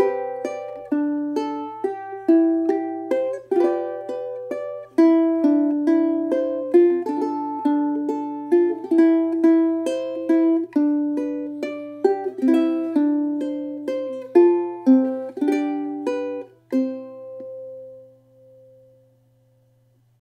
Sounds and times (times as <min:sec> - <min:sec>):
Music: 0:00.0 - 0:19.9.